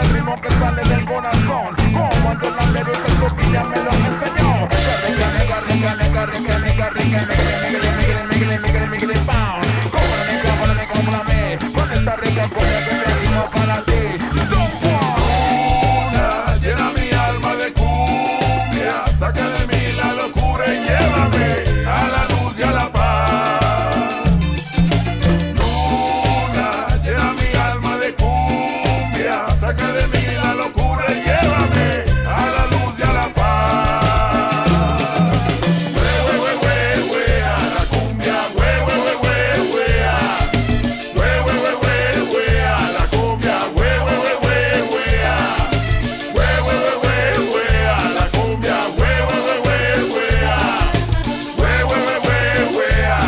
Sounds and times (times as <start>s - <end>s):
Music: 0.0s - 53.2s.